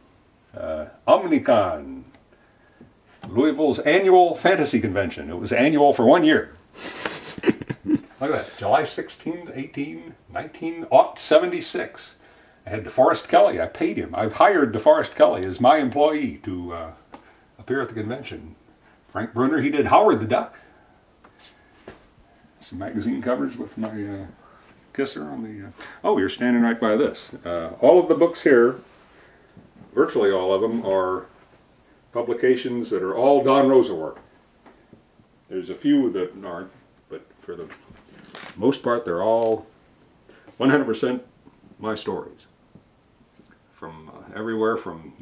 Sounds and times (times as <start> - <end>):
Inside, small room: 0.0 - 45.2
Speech: 0.5 - 2.2, 3.2 - 6.6, 8.2 - 20.7, 22.6 - 28.9, 29.9 - 31.3, 32.1 - 34.3, 35.5 - 39.7, 40.6 - 42.6, 43.7 - 45.2.